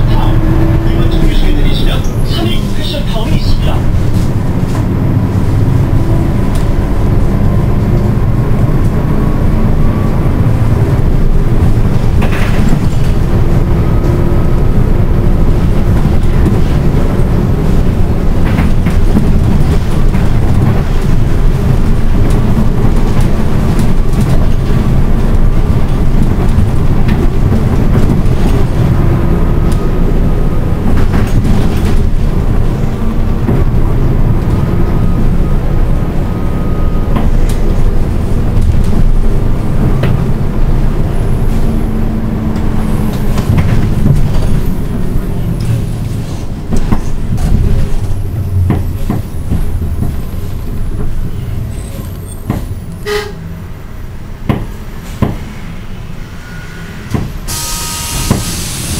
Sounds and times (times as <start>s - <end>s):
Train: 0.0s - 58.9s.